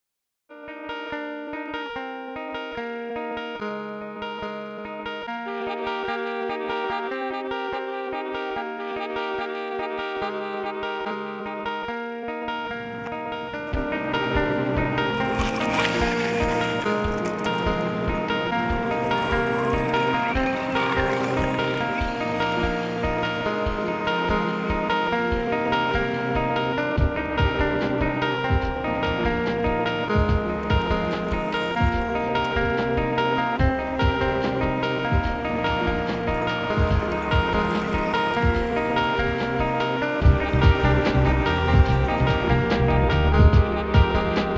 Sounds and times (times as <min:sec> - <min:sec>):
Effects unit: 0:00.5 - 0:44.5
Music: 0:00.5 - 0:44.5.